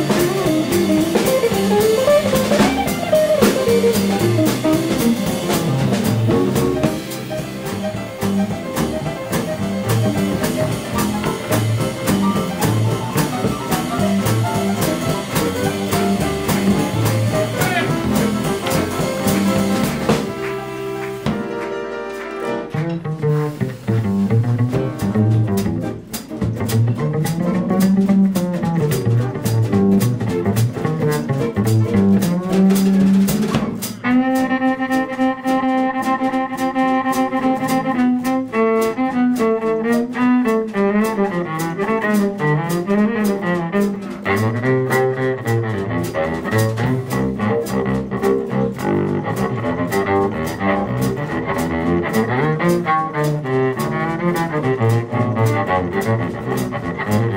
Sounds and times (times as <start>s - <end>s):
Double bass: 0.0s - 57.3s
Cello: 34.0s - 57.3s.